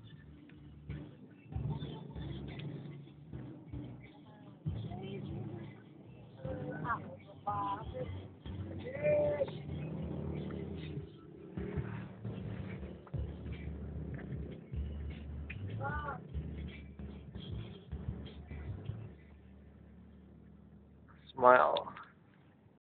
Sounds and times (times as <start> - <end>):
Speech: 6.4 - 8.2, 15.8 - 16.2, 21.3 - 22.0.